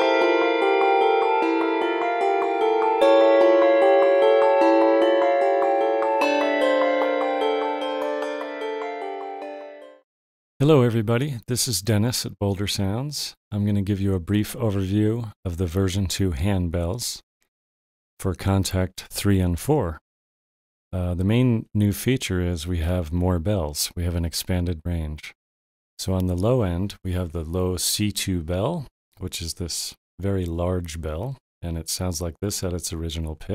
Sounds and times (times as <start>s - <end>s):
Speech: 10.6s - 17.2s, 18.2s - 20.0s, 21.0s - 25.4s, 26.0s - 33.5s.